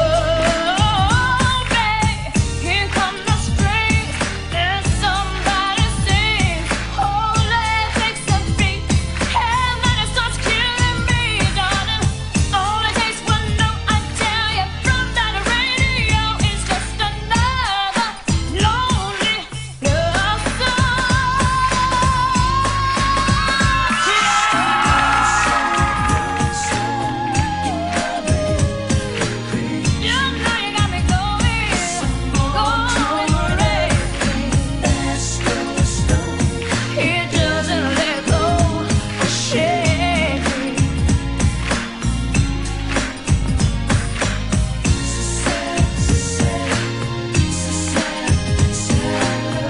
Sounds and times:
Female singing: 0:00.0 - 0:36.4, 0:37.0 - 0:40.9
Music: 0:00.0 - 0:49.6.

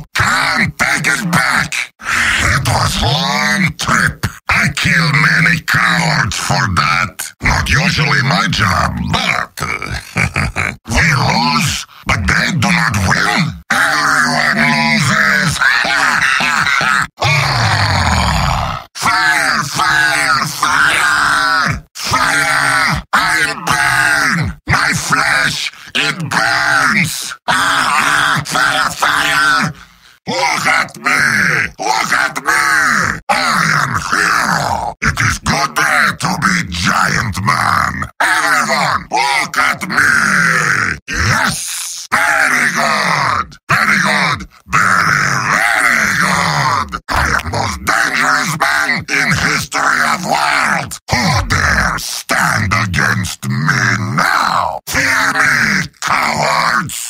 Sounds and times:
Male speech, man speaking: 0:00.0 - 0:10.1, 0:10.9 - 0:17.4, 0:19.0 - 0:57.1
Speech synthesizer: 0:00.0 - 0:57.1.

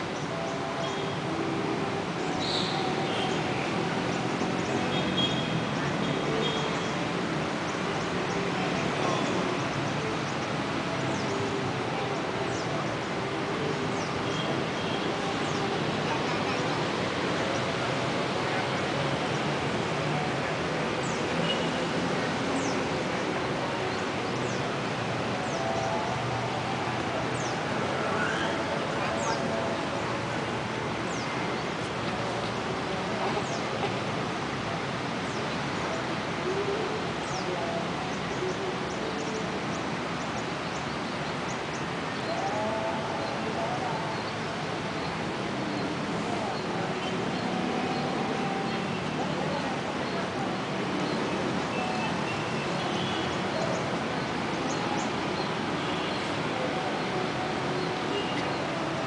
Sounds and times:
Outside, urban or manmade: 0:00.0 - 0:59.0.

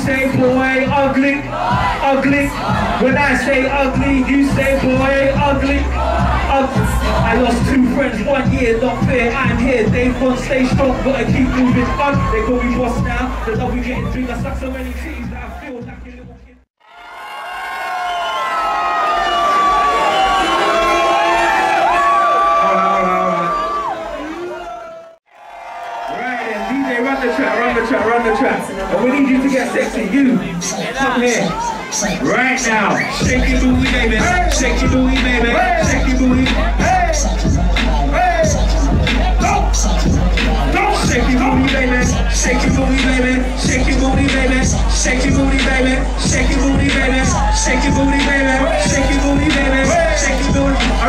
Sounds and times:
Speech: 0:06.5 - 0:16.6, 0:26.1 - 0:37.3.

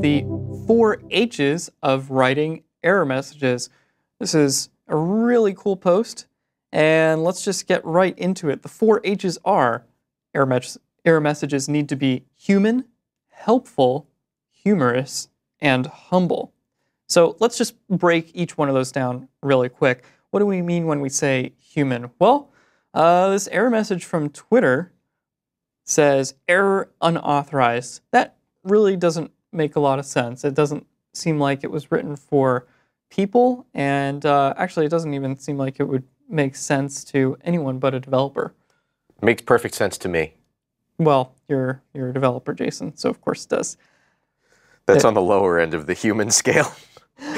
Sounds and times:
Speech: 0:00.0 - 0:16.5, 0:17.1 - 0:24.9, 0:25.9 - 0:38.5, 0:39.2 - 0:40.4, 0:41.0 - 0:43.8, 0:44.9 - 0:47.3.

